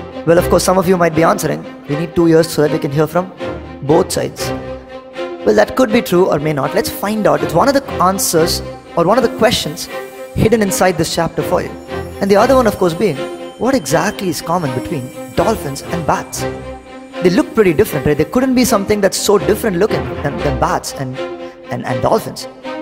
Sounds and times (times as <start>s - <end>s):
Music: 0.0s - 22.8s
Speech: 0.3s - 4.6s, 5.4s - 16.4s, 17.2s - 22.5s.